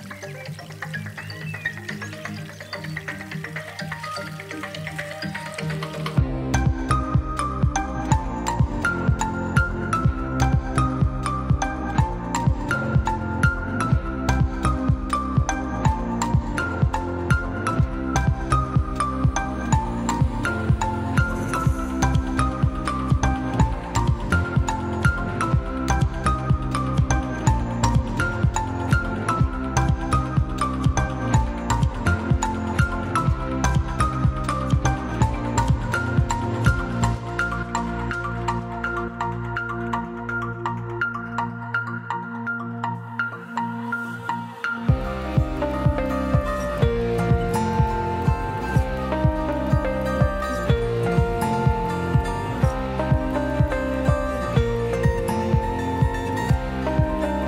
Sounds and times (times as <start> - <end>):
Music: 0.0 - 57.4.